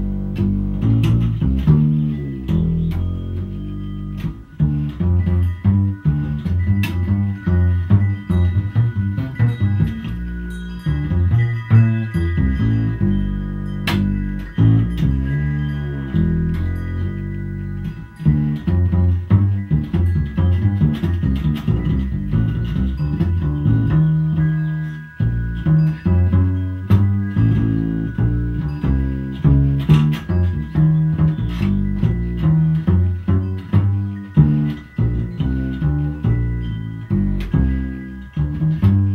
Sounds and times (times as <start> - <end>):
Double bass: 0.0 - 39.1.